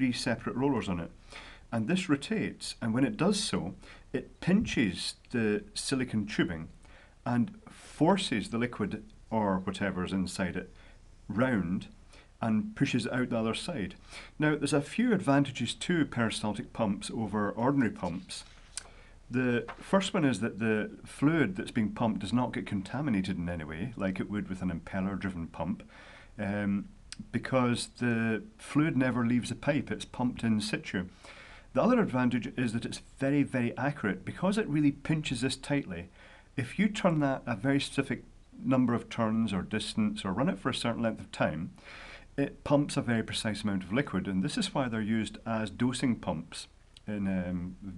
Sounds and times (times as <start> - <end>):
Speech: 0.0 - 18.6, 19.3 - 31.2, 31.8 - 41.8, 42.4 - 47.9.